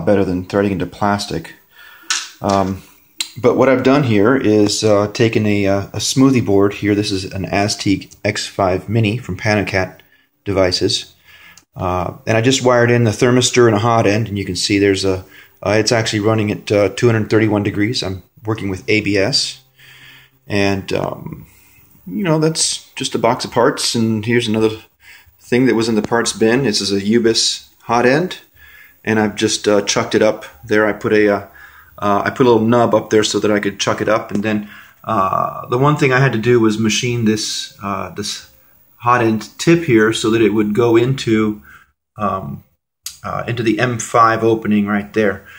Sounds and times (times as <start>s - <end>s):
Speech: 0.0s - 1.6s, 2.3s - 19.7s, 20.4s - 41.6s, 42.2s - 45.5s.